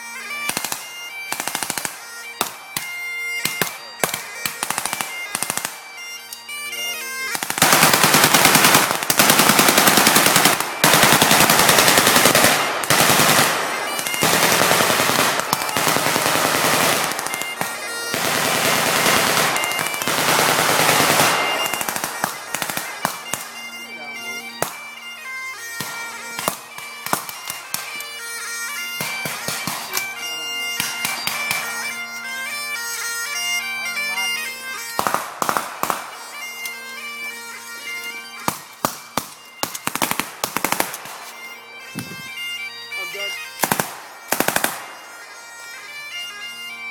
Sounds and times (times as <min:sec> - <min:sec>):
Bagpipes: 0:00.0 - 0:46.9
Wind instrument, woodwind instrument: 0:00.0 - 0:46.9.